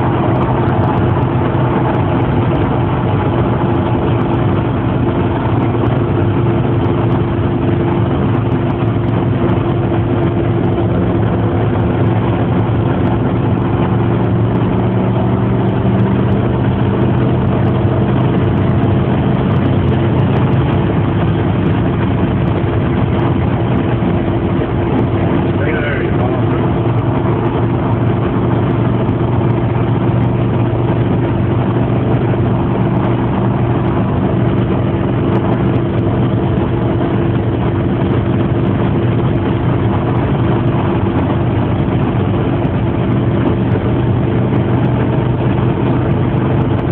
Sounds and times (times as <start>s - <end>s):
Speech: 25.6s - 26.6s.